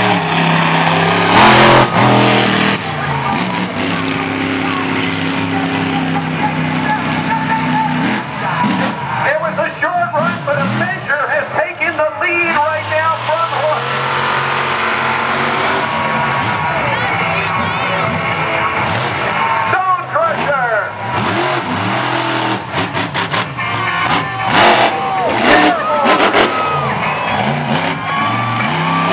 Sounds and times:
Car: 0:00.0 - 0:29.1
Speech: 0:04.5 - 0:13.9, 0:19.6 - 0:20.9.

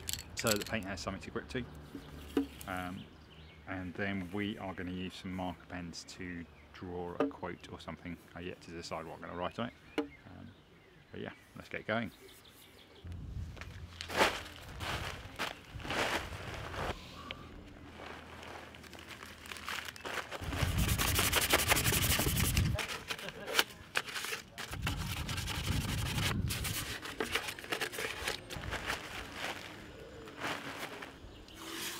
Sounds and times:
Speech: 0:00.4 - 0:01.7, 0:02.7 - 0:03.1, 0:03.7 - 0:10.5, 0:11.1 - 0:12.2.

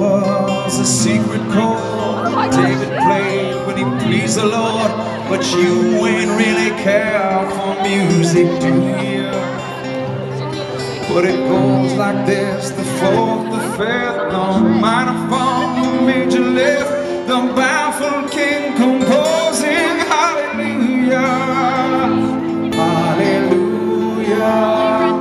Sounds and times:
Music: 0:00.0 - 0:25.2
Speech: 0:00.0 - 0:25.2.

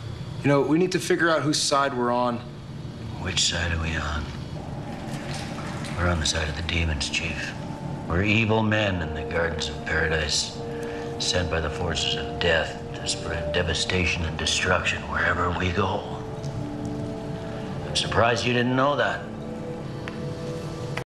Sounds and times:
Narration, monologue: 0:00.2 - 0:21.0
Male speech, man speaking: 0:00.4 - 0:02.5, 0:03.1 - 0:04.4, 0:06.0 - 0:10.6, 0:11.2 - 0:16.2, 0:17.8 - 0:19.3
Music: 0:02.4 - 0:21.0.

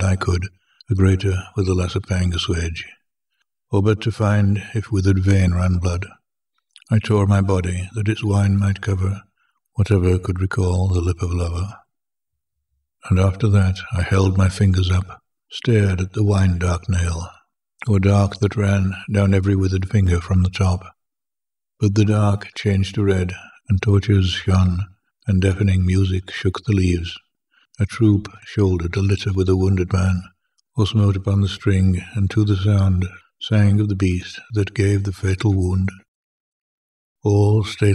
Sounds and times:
Speech: 0:00.0 - 0:03.0, 0:03.7 - 0:06.2, 0:06.8 - 0:11.9, 0:13.0 - 0:21.0, 0:21.8 - 0:36.1, 0:37.2 - 0:37.9.

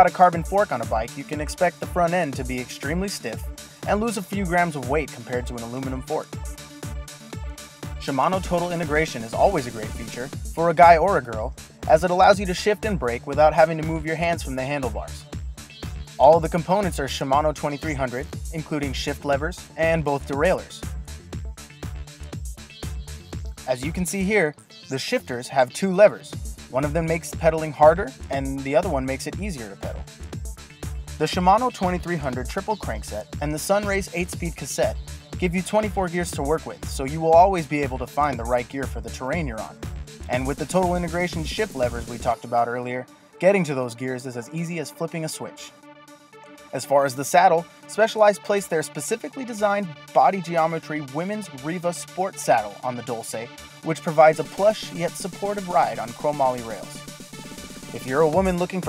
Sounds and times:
Speech: 0:00.0 - 0:06.3, 0:08.0 - 0:15.2, 0:16.2 - 0:20.8, 0:23.7 - 0:30.0, 0:31.2 - 0:45.7, 0:46.7 - 0:57.0, 0:57.9 - 0:58.8
Music: 0:00.0 - 0:58.8.

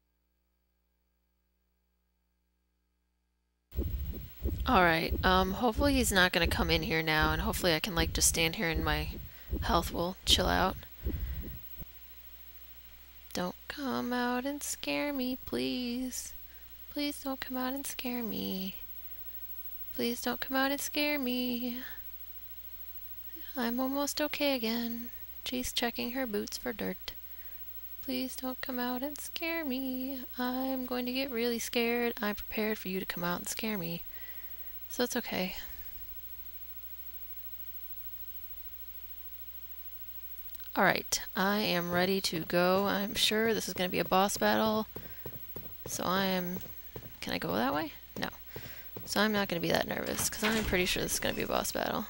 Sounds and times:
Speech: 0:04.7 - 0:10.9, 0:13.3 - 0:16.4, 0:17.0 - 0:18.8, 0:20.0 - 0:22.0, 0:23.4 - 0:27.2, 0:28.1 - 0:34.0, 0:34.9 - 0:35.8, 0:40.7 - 0:44.9, 0:45.9 - 0:48.4, 0:49.0 - 0:52.0.

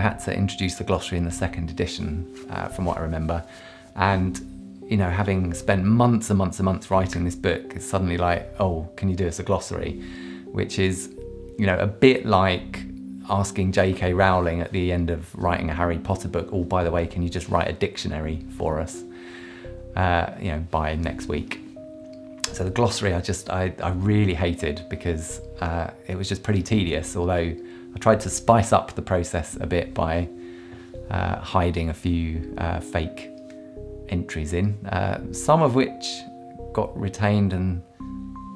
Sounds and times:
Speech: 0:00.0 - 0:19.0, 0:20.0 - 0:21.7, 0:22.5 - 0:30.3, 0:31.1 - 0:33.3, 0:34.1 - 0:37.8
Music: 0:00.0 - 0:38.5.

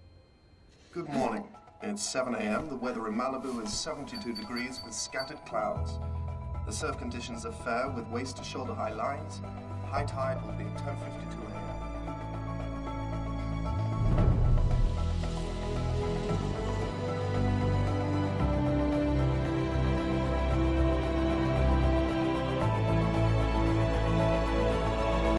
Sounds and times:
Music: 0:00.0 - 0:25.3.

